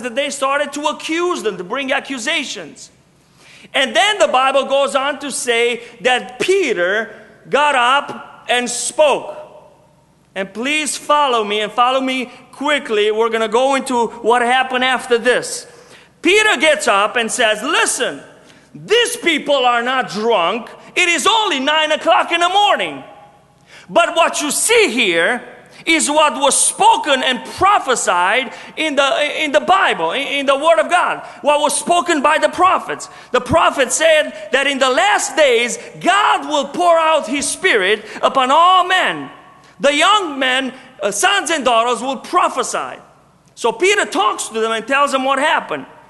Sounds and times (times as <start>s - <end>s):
Speech: 0.0s - 2.9s, 3.7s - 9.5s, 10.4s - 23.1s, 23.9s - 45.9s.